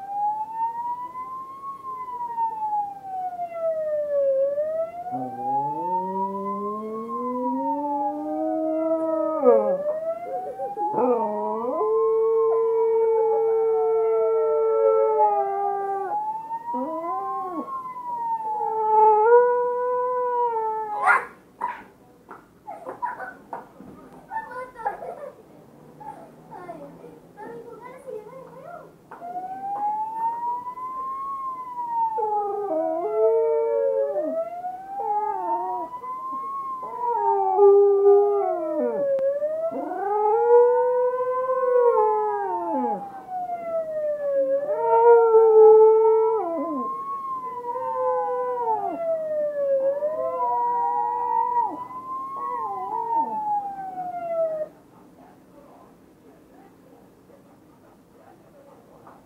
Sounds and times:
Police car (siren): 0:00.0 - 0:21.1, 0:29.1 - 0:54.7.

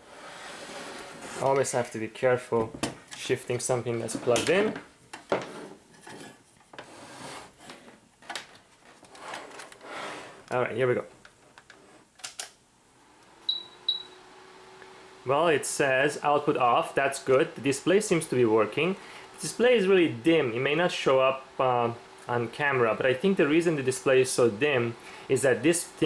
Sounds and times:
Speech: 0:01.4 - 0:04.9, 0:10.5 - 0:11.2, 0:15.3 - 0:26.0.

